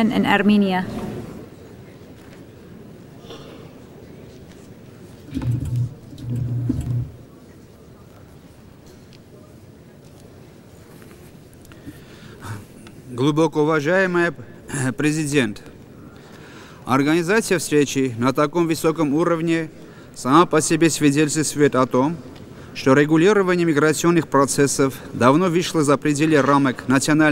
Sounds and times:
Narration, monologue: 0:11.8 - 0:27.3
Male speech, man speaking: 0:12.4 - 0:15.7, 0:16.9 - 0:22.2, 0:22.8 - 0:27.3.

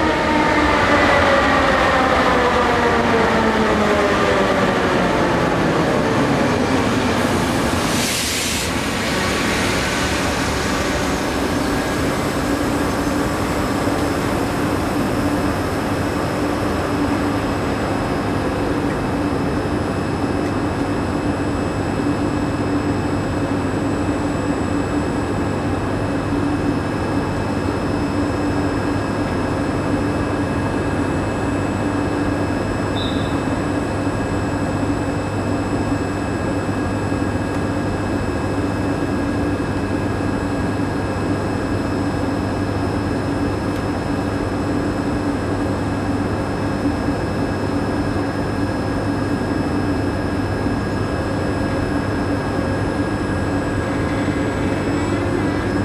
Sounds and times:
Vehicle: 0:00.0 - 0:55.8.

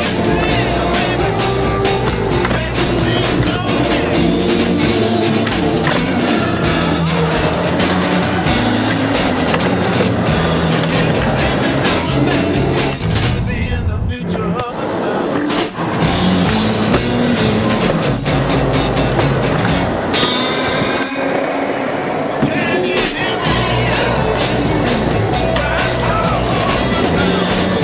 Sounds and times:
Music: 0:00.0 - 0:27.8
Skateboard: 0:05.3 - 0:13.0.

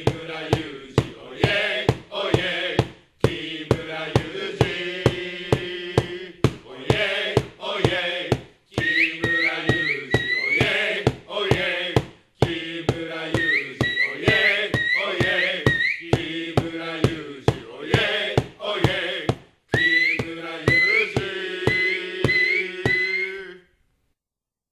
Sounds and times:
Mantra: 0:00.0 - 0:23.6.

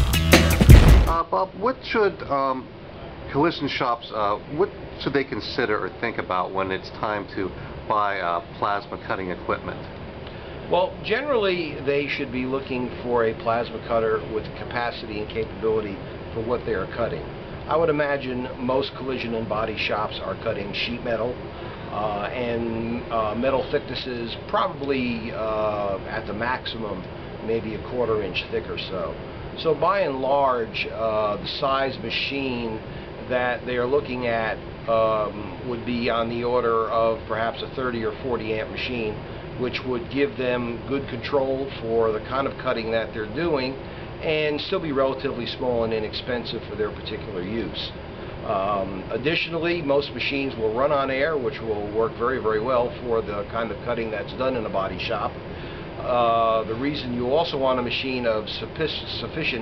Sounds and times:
Speech: 0:01.1 - 0:02.7, 0:03.3 - 0:09.9, 0:10.7 - 0:55.4, 0:56.0 - 0:59.6.

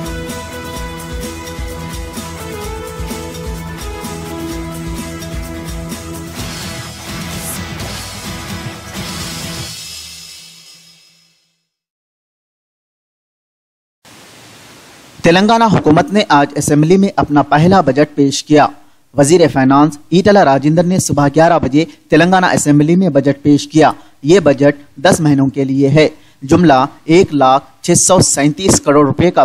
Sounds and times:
Pink noise: 0:14.1 - 0:15.6.

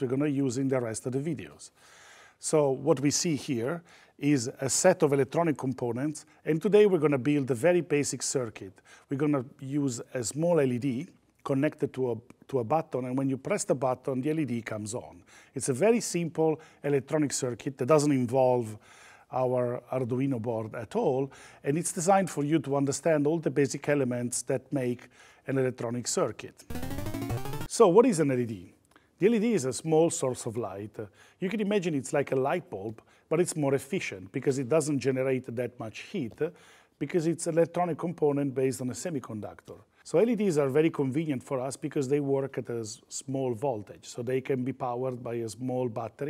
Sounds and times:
Speech: 0:00.0 - 0:01.8, 0:02.4 - 0:26.7, 0:27.7 - 0:46.3.

